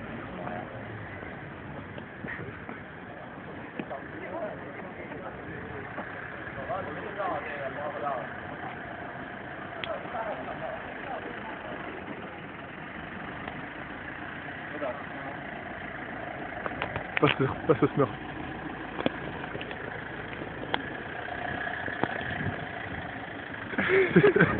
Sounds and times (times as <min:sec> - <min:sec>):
Speech: 0:03.6 - 0:08.9, 0:09.7 - 0:12.4, 0:14.7 - 0:15.4.